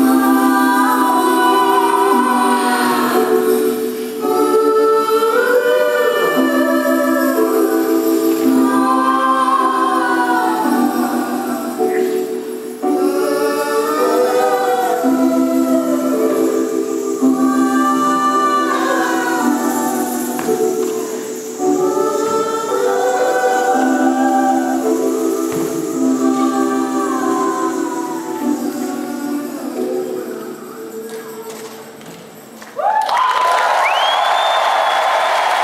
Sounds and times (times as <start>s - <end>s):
Choir: 0.0s - 32.1s, 32.8s - 35.6s.